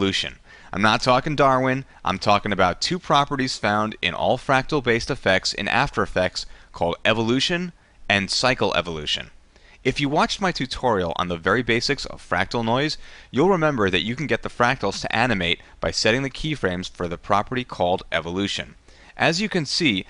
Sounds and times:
Speech: 0.0 - 20.0.

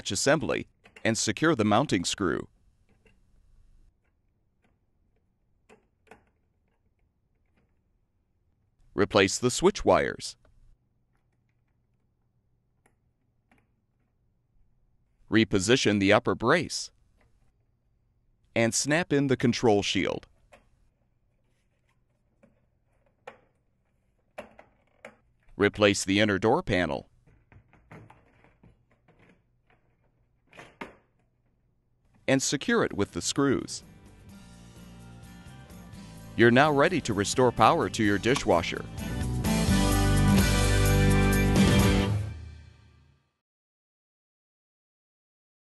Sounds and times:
Speech: 0.0 - 2.5, 9.0 - 10.4, 15.3 - 17.0, 18.6 - 20.3, 25.6 - 27.1, 32.3 - 33.8, 36.4 - 38.9.

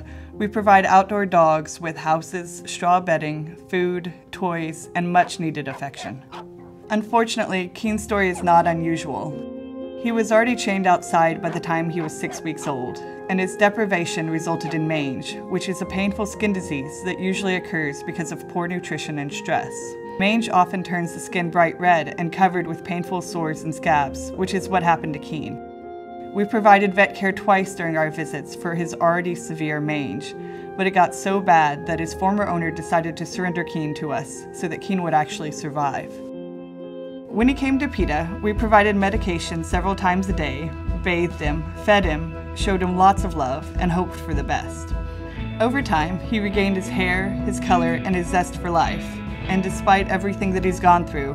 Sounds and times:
Speech: 0.0 - 6.3, 6.9 - 9.4, 10.0 - 25.6, 26.4 - 36.2, 37.3 - 44.9, 45.6 - 51.3
Music: 0.0 - 51.3.

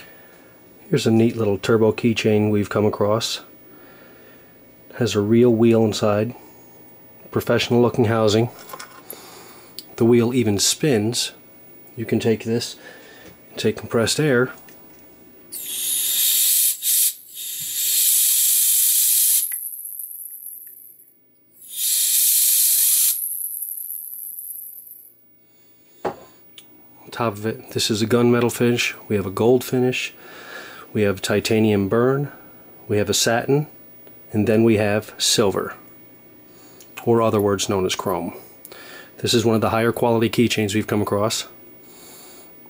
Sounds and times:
Speech: 0.9 - 3.5, 4.9 - 6.4, 7.3 - 8.6, 10.0 - 11.4, 12.0 - 12.8, 13.6 - 14.6, 27.1 - 30.2, 30.9 - 35.9, 37.0 - 38.4, 39.2 - 41.6.

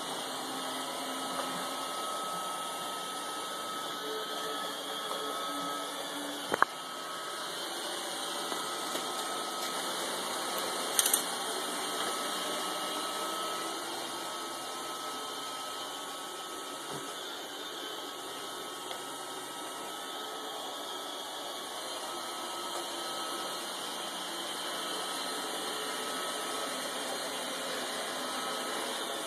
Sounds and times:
Vacuum cleaner: 0.0 - 29.2
Music: 0.1 - 15.4.

